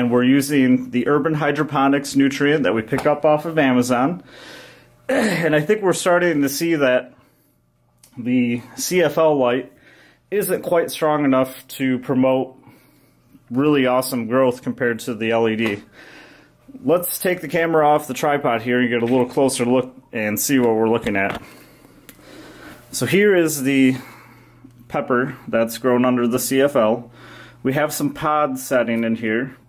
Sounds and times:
Speech: 0.0s - 4.3s, 5.1s - 7.2s, 8.1s - 9.7s, 10.3s - 12.6s, 13.5s - 15.9s, 16.8s - 21.5s, 23.0s - 24.2s, 24.9s - 29.6s.

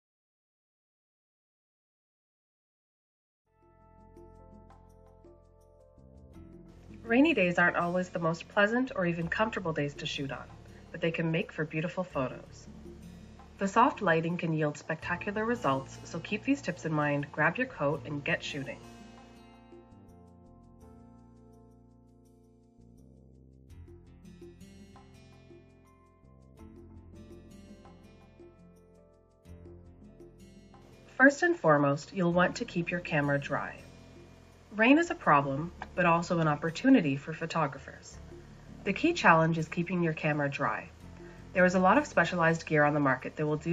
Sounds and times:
Music: 3.5s - 43.7s
Speech: 7.0s - 12.7s, 13.6s - 18.8s, 31.2s - 33.8s, 34.8s - 38.2s, 38.9s - 41.0s, 41.6s - 43.7s.

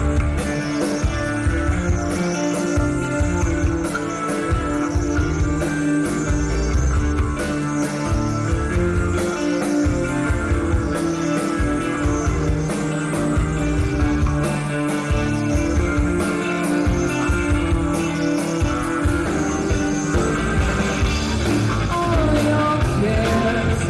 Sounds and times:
Music: 0.0s - 23.8s.

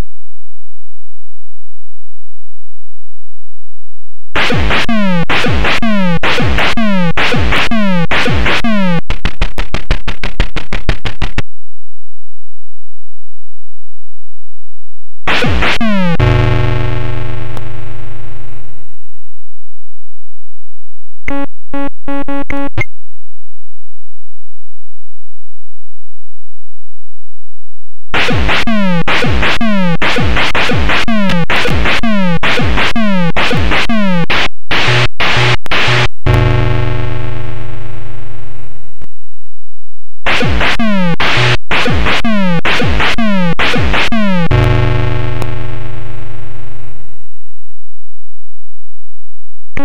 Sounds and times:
Music: 4.4s - 11.4s, 15.3s - 17.7s, 28.2s - 37.5s, 40.3s - 46.0s.

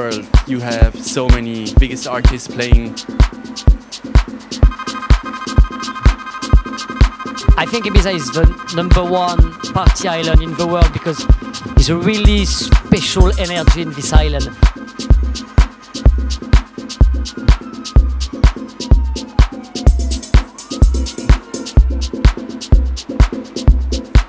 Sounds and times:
Speech: 0.0s - 2.9s, 7.6s - 11.2s, 11.8s - 14.6s
Rhythm and blues: 0.0s - 24.2s.

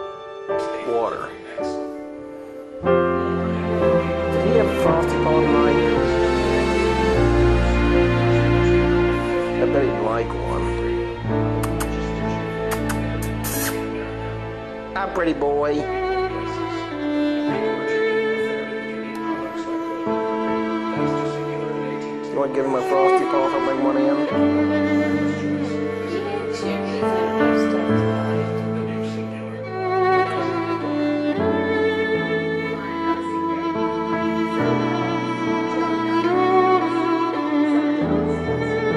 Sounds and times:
Cello: 0.0s - 38.9s
Speech: 22.2s - 24.3s.

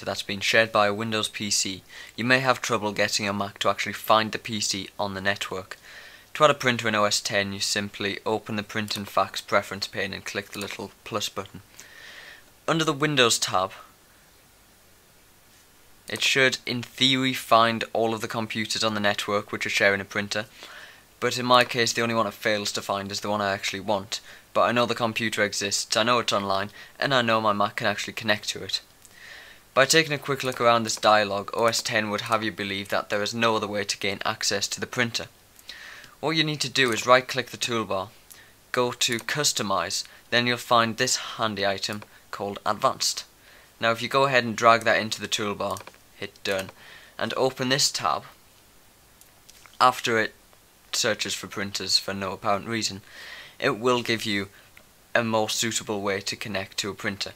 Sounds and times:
Speech: 0.0s - 5.8s, 6.4s - 11.7s, 12.7s - 13.9s, 16.1s - 20.5s, 21.2s - 28.9s, 29.8s - 35.4s, 36.2s - 48.4s, 49.8s - 57.3s.

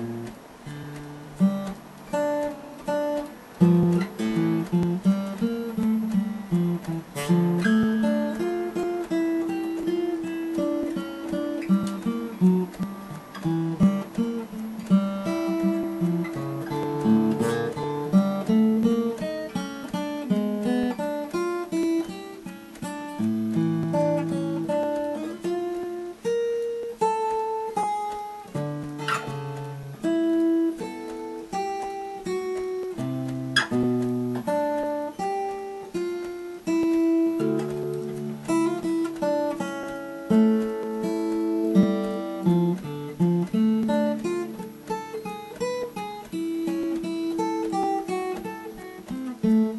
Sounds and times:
Acoustic guitar: 0.0s - 49.7s.

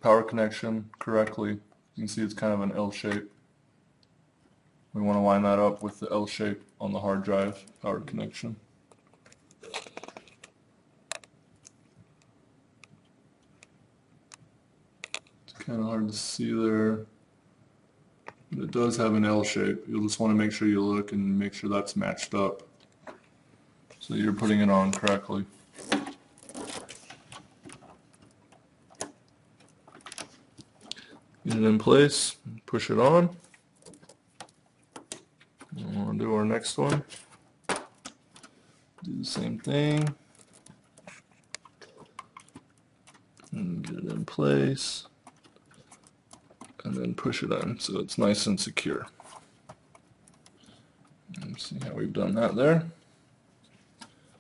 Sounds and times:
Speech: 0.0s - 3.4s, 4.9s - 8.6s, 15.5s - 17.1s, 18.5s - 22.7s, 24.0s - 25.6s, 31.4s - 33.5s, 35.7s - 37.2s, 39.0s - 40.2s, 43.5s - 45.2s, 46.8s - 49.2s, 51.3s - 53.0s
Inside, small room: 0.0s - 54.4s.

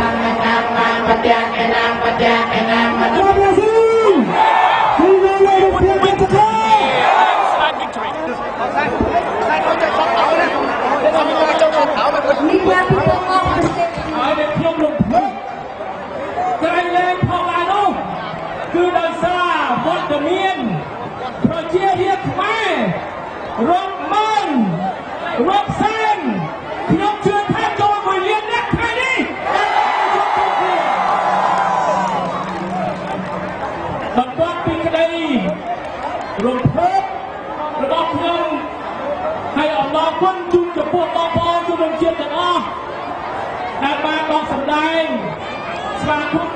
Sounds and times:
Male speech, man speaking: 3.2s - 4.3s, 5.0s - 15.4s, 16.4s - 18.1s, 18.7s - 23.0s, 23.6s - 29.4s, 34.2s - 35.6s, 36.4s - 38.7s, 39.6s - 42.8s, 43.8s - 45.4s, 46.0s - 46.5s
Conversation: 5.8s - 15.4s.

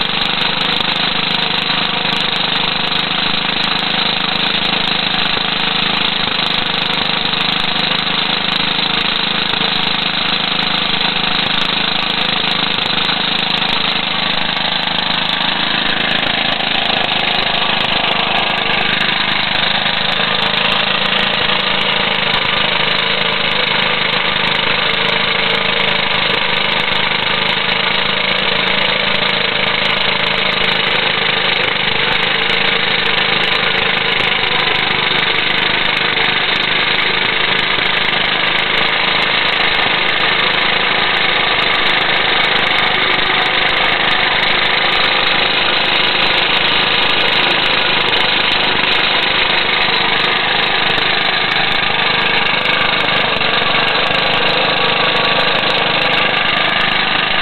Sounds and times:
Idling: 0.0s - 57.4s
Medium engine (mid frequency): 0.0s - 57.4s.

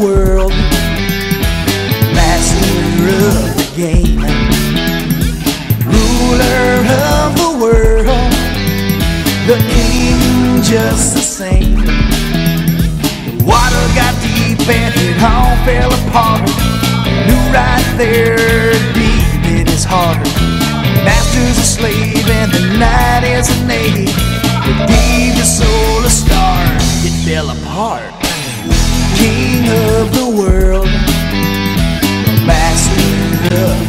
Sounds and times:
Music: 0.0s - 33.8s.

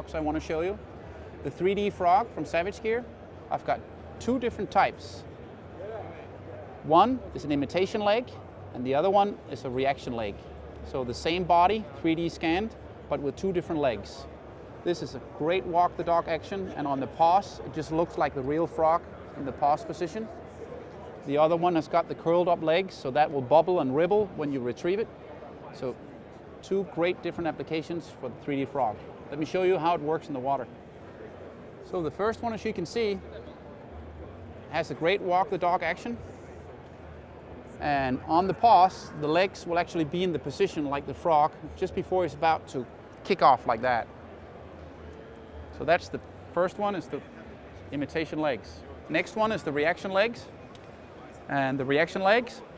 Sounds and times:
Speech: 0.0s - 0.8s, 1.4s - 5.2s, 5.8s - 20.4s, 21.2s - 26.0s, 26.6s - 30.7s, 31.8s - 33.6s, 34.7s - 36.2s, 37.8s - 44.1s, 45.7s - 50.5s, 51.2s - 52.7s.

